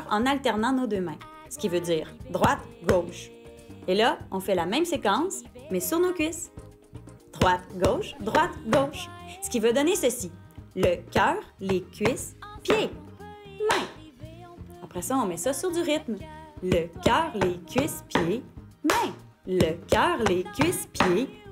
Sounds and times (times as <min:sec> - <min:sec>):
Speech: 0:00.0 - 0:06.5, 0:07.4 - 0:13.0, 0:14.8 - 0:21.5
Music: 0:00.0 - 0:21.5.